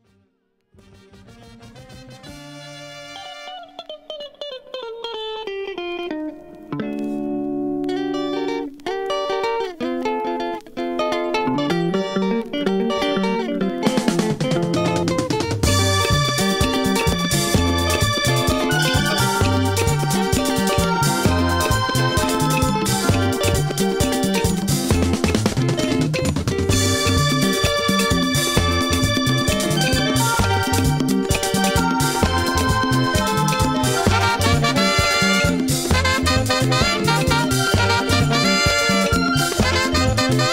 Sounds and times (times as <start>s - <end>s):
Reggae: 0.8s - 4.4s, 5.3s - 40.5s.